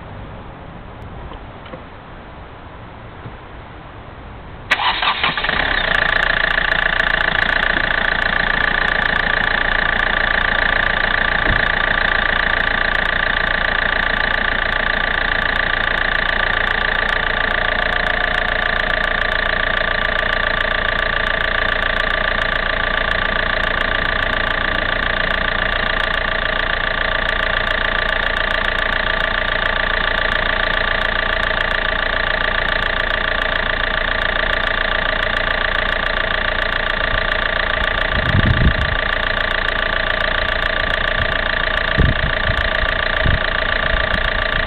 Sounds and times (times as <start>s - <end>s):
Engine: 0.0s - 44.6s
Vehicle: 0.0s - 44.6s.